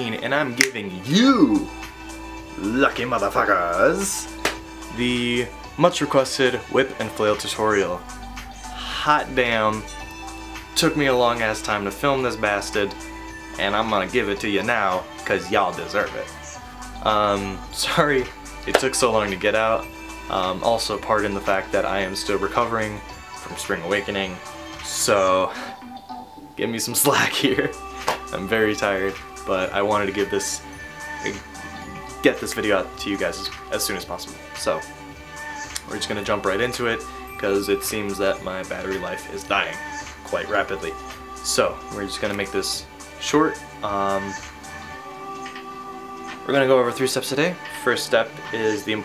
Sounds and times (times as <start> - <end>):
Speech: 0.0 - 1.7, 2.6 - 4.3, 4.9 - 8.0, 8.8 - 9.9, 10.8 - 13.0, 13.6 - 16.3, 17.0 - 25.5, 26.6 - 30.6, 31.2 - 34.8, 35.8 - 44.4, 46.5 - 49.0
Music: 0.0 - 49.0.